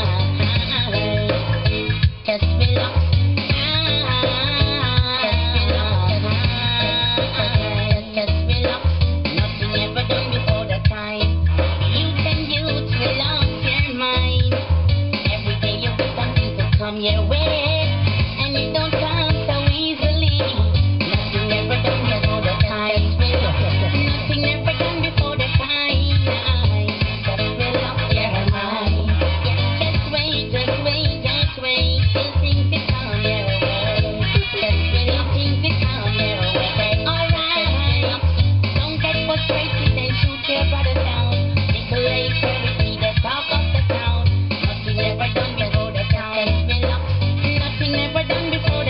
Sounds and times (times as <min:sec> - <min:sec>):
Music: 0:00.0 - 0:48.8.